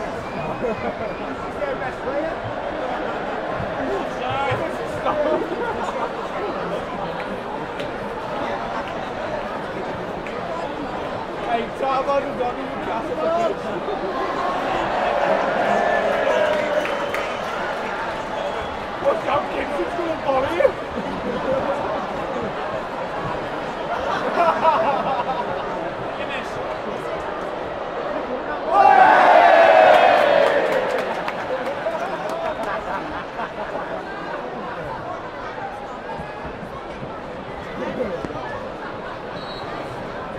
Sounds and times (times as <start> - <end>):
Speech: 0.0 - 28.9.